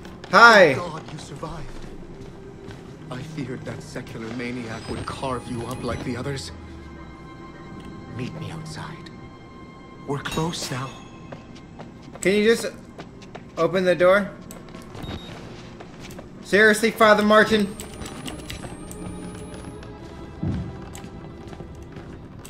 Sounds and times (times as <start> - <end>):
Walk, footsteps: 11.3 - 13.6, 19.8 - 22.5.